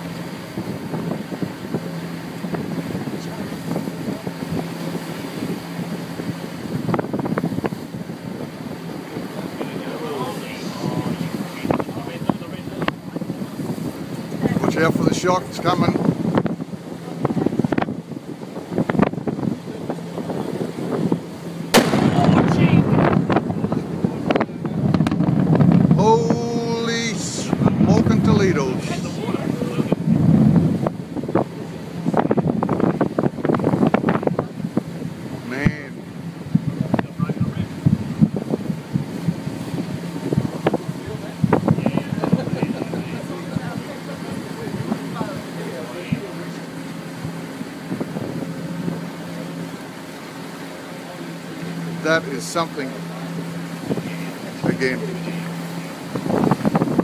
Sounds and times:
Wind noise (microphone): 0.0s - 49.8s, 51.7s - 57.0s.

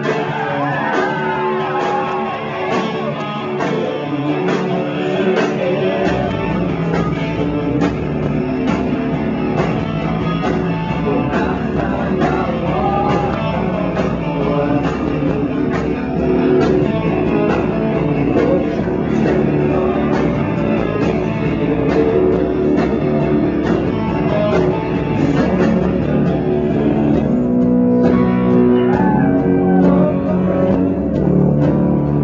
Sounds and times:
Music: 0.0s - 32.2s.

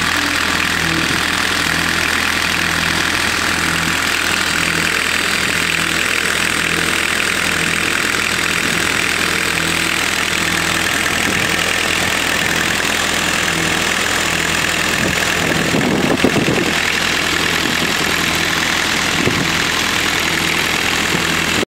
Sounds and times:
Idling: 0.0s - 21.6s
Medium engine (mid frequency): 0.0s - 21.6s.

